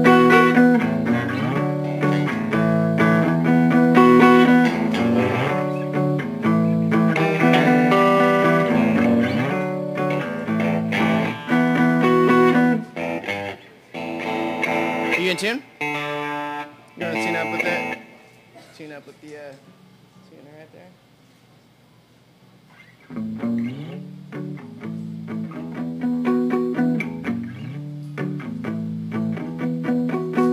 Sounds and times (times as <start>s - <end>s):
Strum: 0.0s - 18.6s
Acoustic guitar: 0.0s - 18.8s, 22.8s - 30.5s
Electric guitar: 0.0s - 18.8s, 22.7s - 30.5s
Speech: 15.1s - 15.7s, 17.0s - 18.0s, 18.6s - 21.0s.